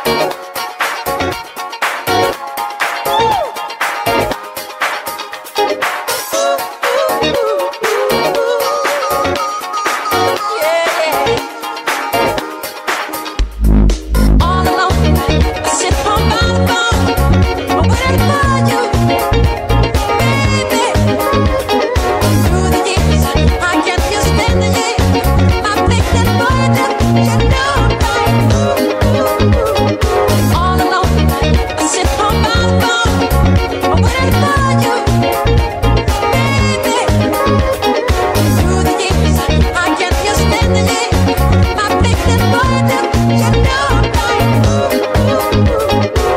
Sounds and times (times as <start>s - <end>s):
Music: 0.0s - 46.3s
Female singing: 6.4s - 9.6s, 10.4s - 11.4s, 14.4s - 17.2s, 17.9s - 19.2s, 20.2s - 29.9s, 30.6s - 33.3s, 33.9s - 35.3s, 36.2s - 46.3s.